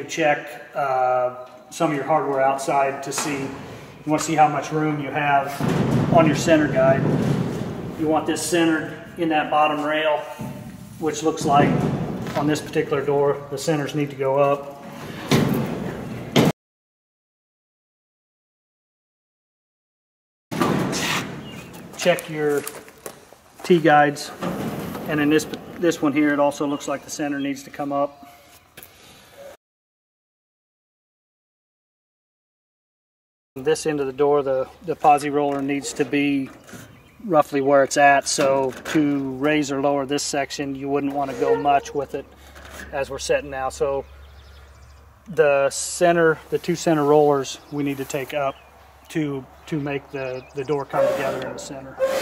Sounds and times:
Speech: 0:00.0 - 0:07.1, 0:08.0 - 0:14.8, 0:22.0 - 0:22.8, 0:23.6 - 0:24.4, 0:25.1 - 0:28.2, 0:33.6 - 0:36.6, 0:37.2 - 0:44.1, 0:45.3 - 0:52.0.

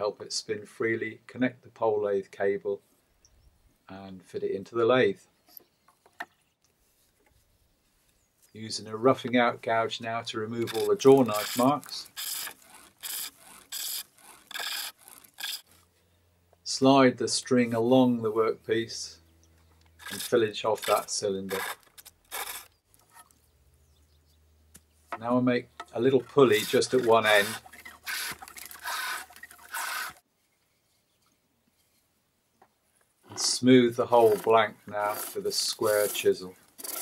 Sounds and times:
Speech: 0:00.0 - 0:02.8, 0:03.9 - 0:05.2, 0:08.6 - 0:12.1, 0:16.7 - 0:19.2, 0:20.1 - 0:21.7, 0:25.2 - 0:27.6, 0:33.3 - 0:36.6
Wood: 0:10.6 - 0:15.7, 0:20.0 - 0:23.3, 0:25.1 - 0:30.2, 0:33.3 - 0:37.0.

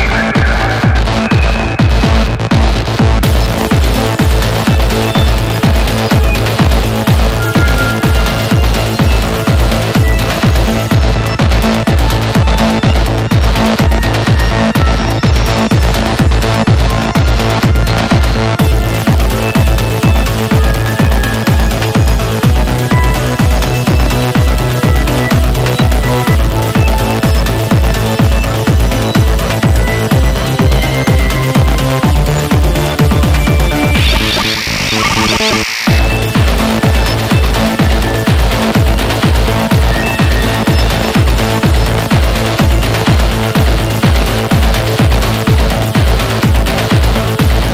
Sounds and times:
Rhythm and blues: 0:00.0 - 0:47.7.

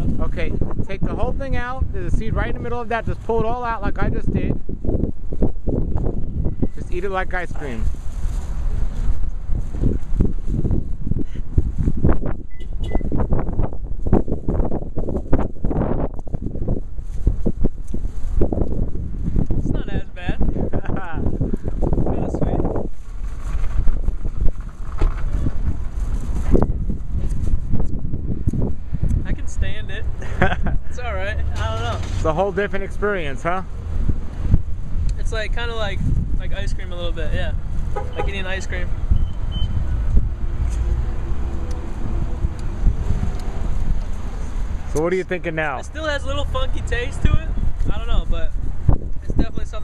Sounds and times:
Car: 0:04.4 - 0:20.6, 0:21.4 - 0:49.8
Speech: 0:06.8 - 0:07.8, 0:35.2 - 0:37.6, 0:38.2 - 0:38.9, 0:44.9 - 0:48.5, 0:49.2 - 0:49.8.

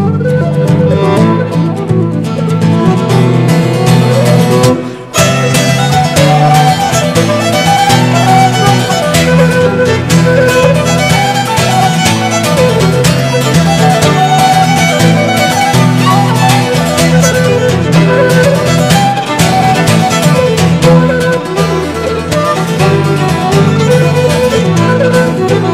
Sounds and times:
Violin, fiddle: 0:00.0 - 0:25.7.

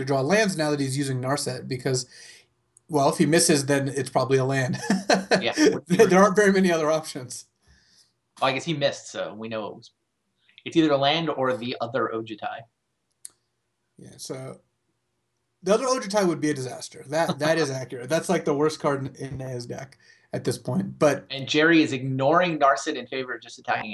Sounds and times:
Speech: 0:00.0 - 0:02.3, 0:02.9 - 0:07.4, 0:08.4 - 0:09.9, 0:10.7 - 0:12.6, 0:14.0 - 0:14.5, 0:15.7 - 0:23.9
Inside, small room: 0:00.0 - 0:23.9.

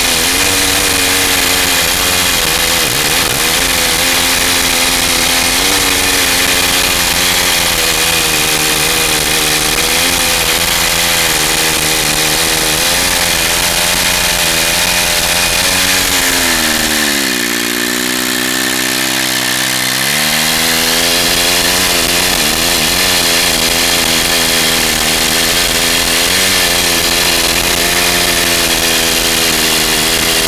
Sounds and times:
Power tool: 0:00.0 - 0:30.4.

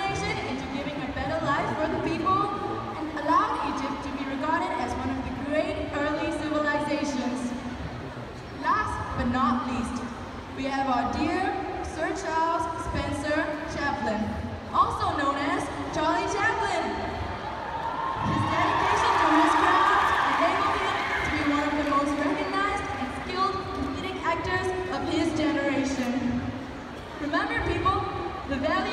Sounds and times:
Speech: 0:00.0 - 0:07.5, 0:18.3 - 0:26.4, 0:27.2 - 0:28.9.

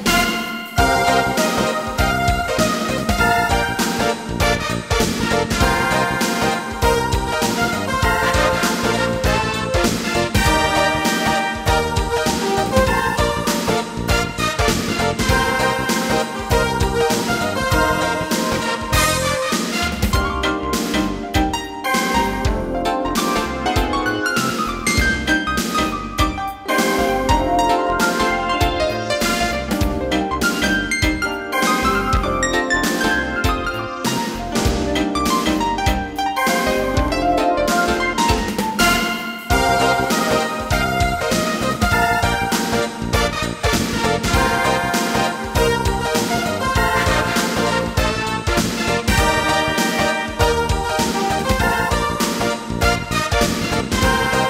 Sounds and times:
Music: 0:00.0 - 0:54.4.

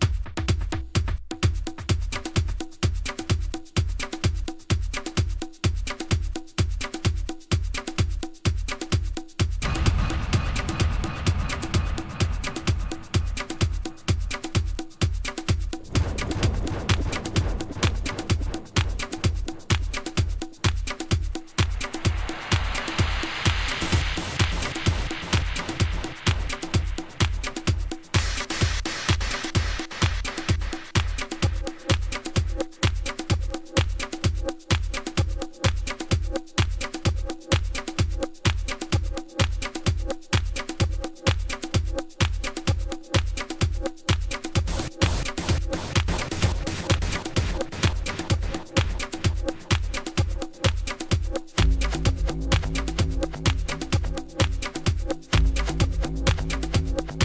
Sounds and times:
Music: 0:00.0 - 0:57.2
Sound effect: 0:09.6 - 0:14.6, 0:15.8 - 0:20.2, 0:21.6 - 0:30.7.

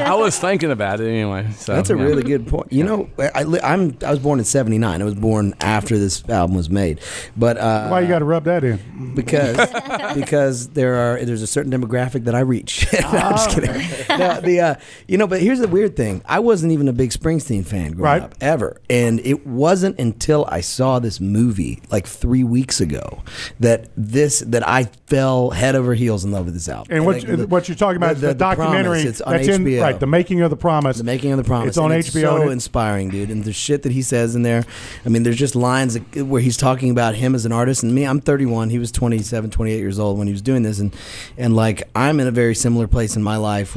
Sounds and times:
Speech: 0:00.0 - 0:43.7.

